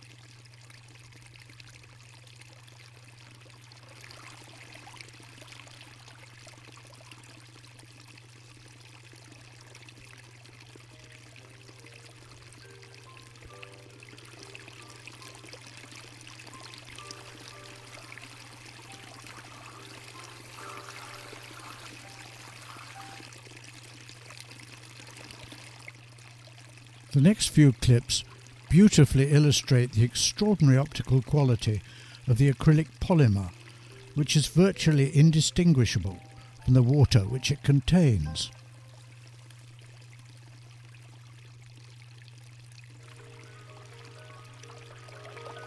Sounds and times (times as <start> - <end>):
Water: 0.0 - 45.6.